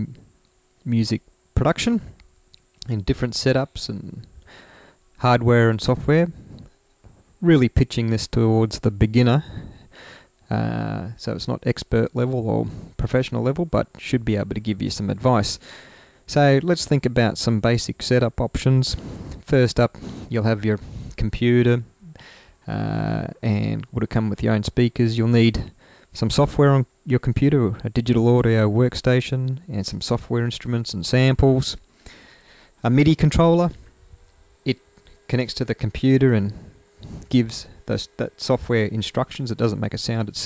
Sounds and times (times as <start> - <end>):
Speech: 0.0 - 0.2, 0.8 - 2.2, 2.8 - 4.3, 5.2 - 6.5, 7.4 - 9.6, 10.5 - 15.6, 16.3 - 21.9, 22.7 - 31.8, 32.8 - 33.8, 34.7 - 36.6, 37.3 - 40.4.